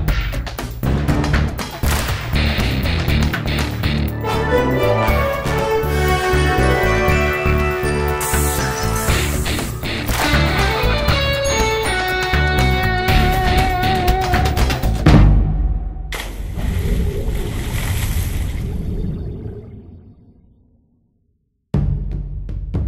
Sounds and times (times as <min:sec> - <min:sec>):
Music: 0:00.0 - 0:16.1, 0:21.7 - 0:22.8.